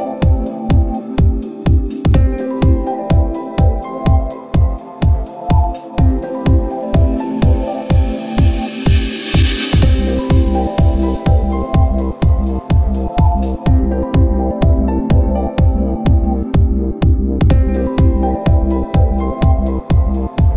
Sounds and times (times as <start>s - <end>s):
Dance music: 0.0s - 20.5s
Happy music: 0.0s - 20.5s
Pop music: 0.0s - 20.5s.